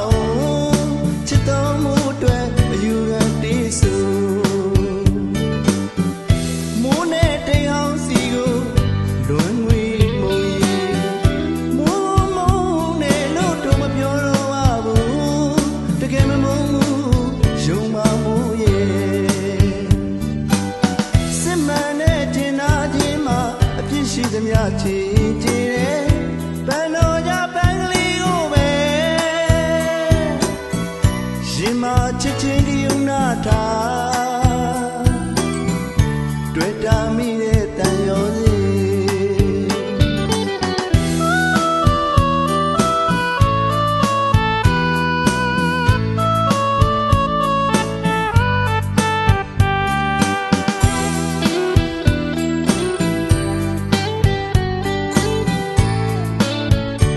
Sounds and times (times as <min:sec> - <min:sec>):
Music: 0:00.0 - 0:57.1.